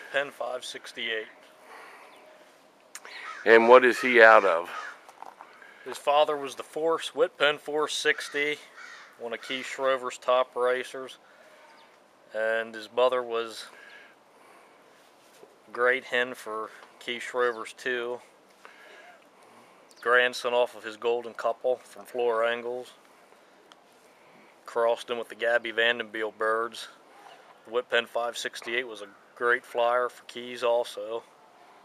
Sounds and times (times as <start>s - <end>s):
Speech: 0.0s - 1.4s, 3.5s - 4.8s, 5.9s - 11.2s, 12.3s - 13.7s, 15.7s - 18.3s, 20.0s - 23.0s, 24.7s - 27.0s, 27.7s - 31.3s.